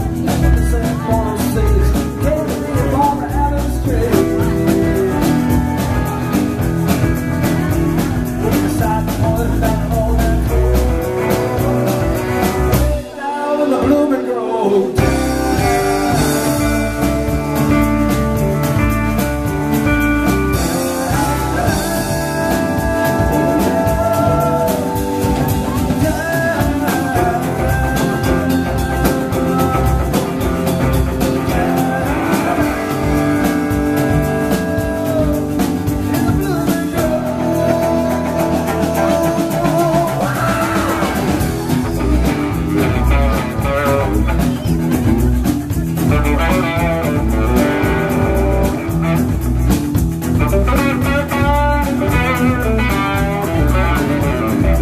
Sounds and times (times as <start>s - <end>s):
Guitar: 0.0s - 54.8s
Singing: 8.2s - 17.7s, 20.5s - 41.8s.